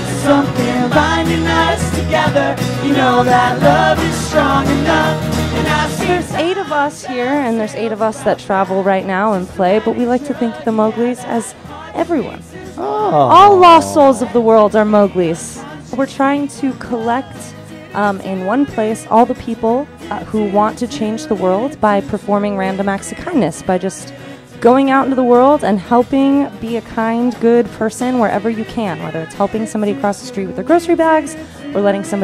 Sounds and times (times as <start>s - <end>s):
Background music: 0.0s - 32.2s.